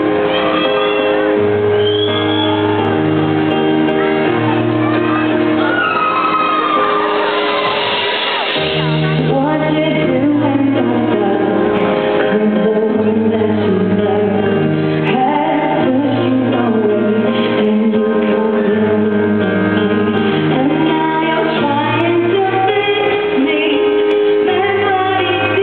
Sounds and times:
Music: 0.0s - 25.6s.

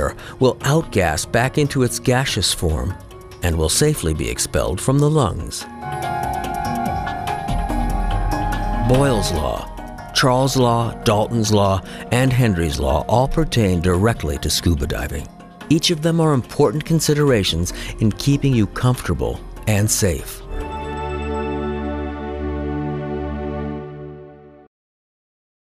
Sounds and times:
Speech: 0.0s - 5.7s, 8.8s - 20.4s
Music: 0.0s - 24.7s.

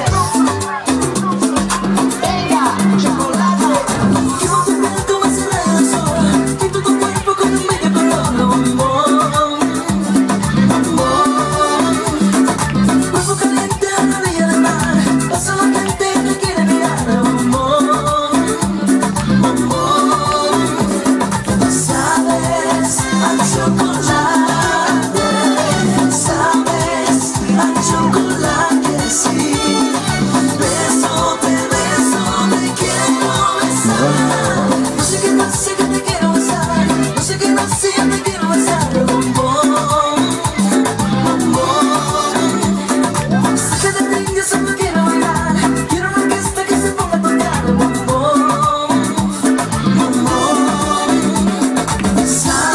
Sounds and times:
Music: 0.0s - 52.7s.

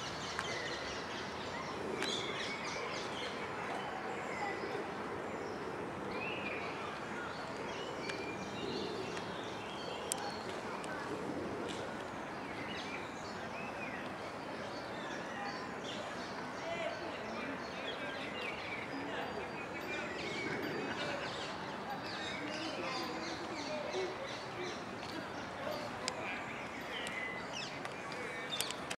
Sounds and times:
Speech: 1.5s - 28.9s
Coo: 19.8s - 21.6s.

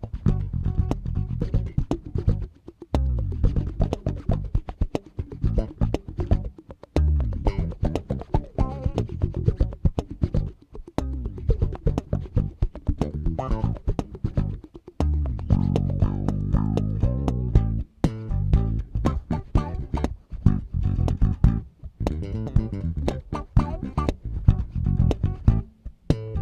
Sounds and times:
Bass guitar: 0.0s - 26.4s
Strum: 0.0s - 26.4s.

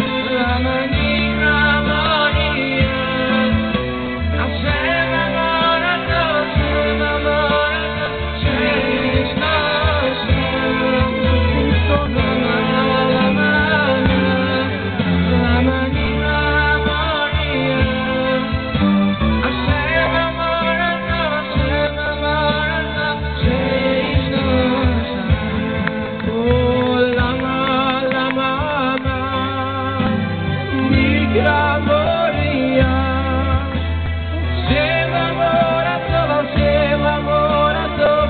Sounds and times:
Male singing: 0.0s - 38.2s
Music: 0.0s - 38.2s.

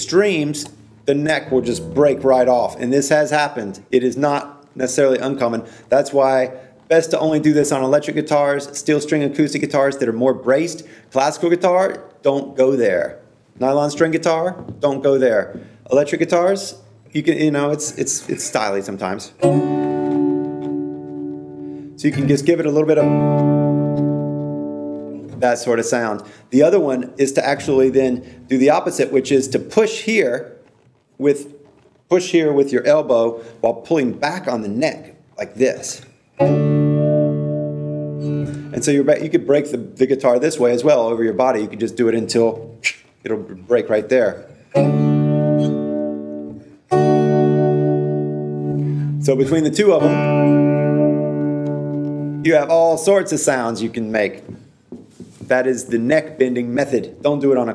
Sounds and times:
Speech: 0.0s - 19.4s, 22.0s - 23.1s, 25.3s - 30.6s, 31.2s - 36.1s, 38.7s - 44.5s, 49.2s - 50.2s, 52.4s - 54.6s, 55.4s - 57.7s
Acoustic guitar: 0.2s - 3.8s, 18.0s - 26.4s, 36.1s - 38.8s, 44.6s - 52.8s.

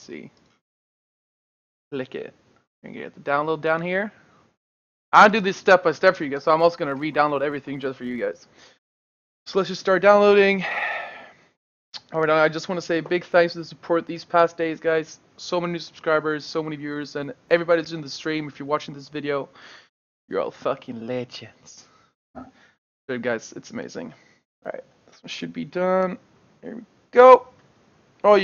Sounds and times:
Speech: 0.0s - 0.3s, 2.0s - 4.1s, 5.2s - 8.5s, 9.5s - 10.7s, 12.0s - 19.5s, 20.3s - 21.9s, 23.1s - 27.5s.

